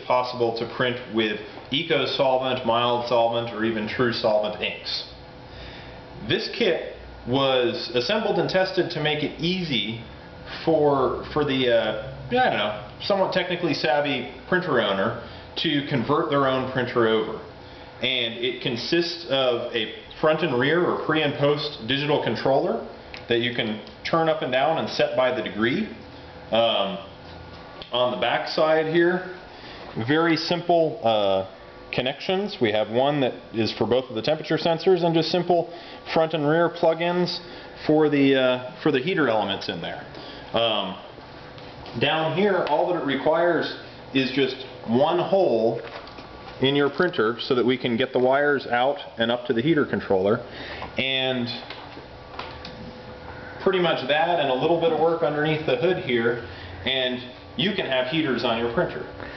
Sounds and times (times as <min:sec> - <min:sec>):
Speech: 0:00.0 - 0:05.2, 0:06.2 - 0:27.2, 0:27.8 - 0:29.4, 0:30.0 - 0:41.1, 0:42.0 - 0:45.9, 0:46.6 - 0:51.7, 0:53.6 - 0:59.2.